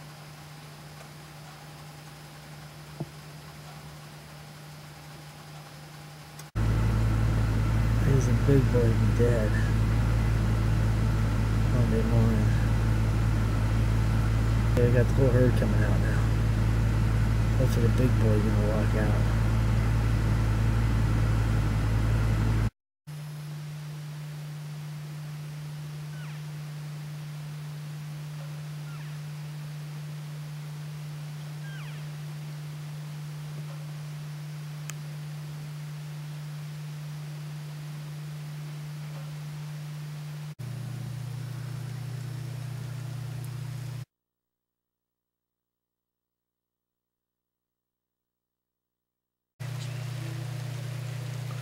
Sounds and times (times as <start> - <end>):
Speech: 8.0 - 9.8, 11.7 - 12.7, 14.8 - 16.4, 17.6 - 19.4.